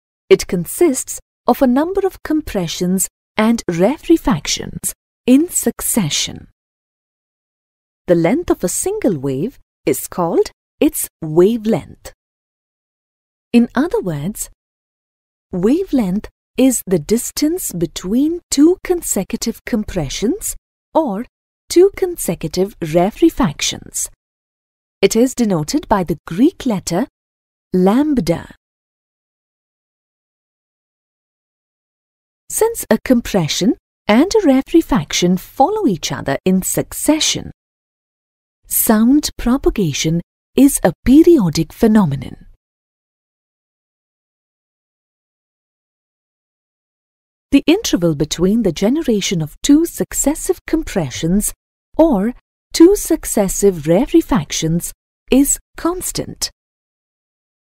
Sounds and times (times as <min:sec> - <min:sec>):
Speech: 0:00.3 - 0:06.4, 0:08.1 - 0:12.2, 0:13.6 - 0:14.6, 0:15.6 - 0:24.2, 0:25.0 - 0:27.1, 0:27.8 - 0:28.6, 0:32.5 - 0:37.6, 0:38.7 - 0:42.6, 0:47.6 - 0:56.6.